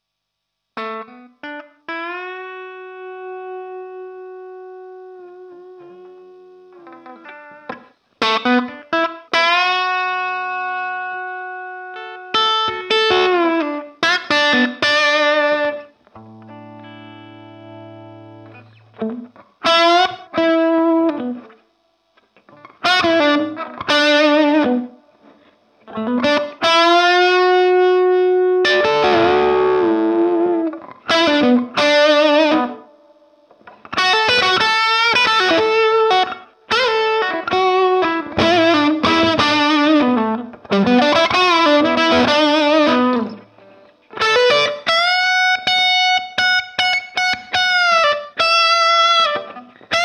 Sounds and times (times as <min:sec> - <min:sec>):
Distortion: 0:00.0 - 0:50.0
Music: 0:00.7 - 0:50.0.